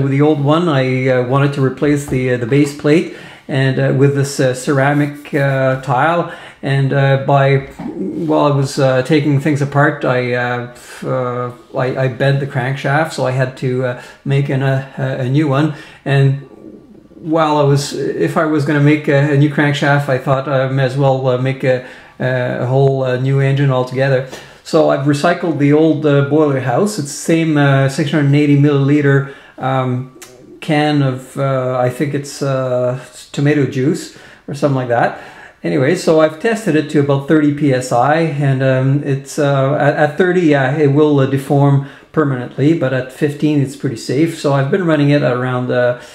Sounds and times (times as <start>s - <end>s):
Speech: 0.0s - 46.1s.